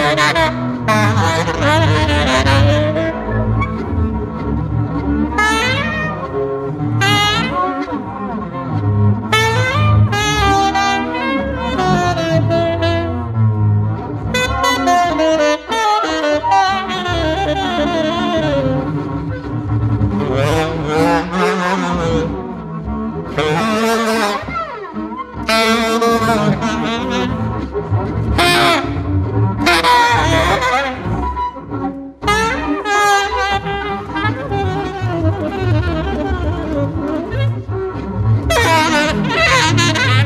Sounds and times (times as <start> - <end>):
Wind instrument, woodwind instrument: 0.0 - 40.2.